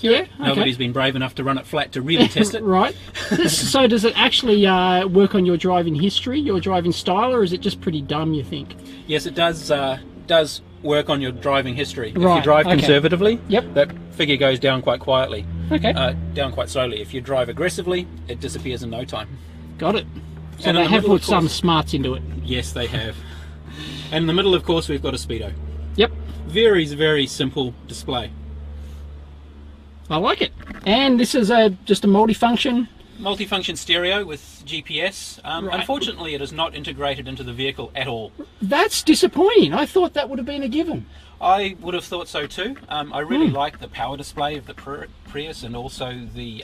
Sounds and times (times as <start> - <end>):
Speech: 0.0 - 23.2, 24.0 - 28.3, 30.1 - 46.6.